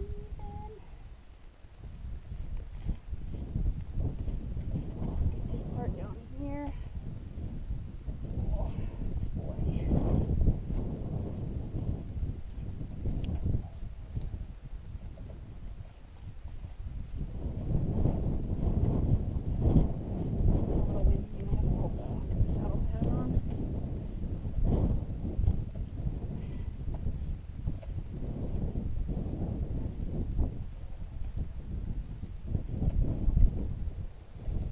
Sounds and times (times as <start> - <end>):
Speech: 0.0 - 0.9, 5.5 - 6.8, 8.4 - 9.9, 20.8 - 23.4.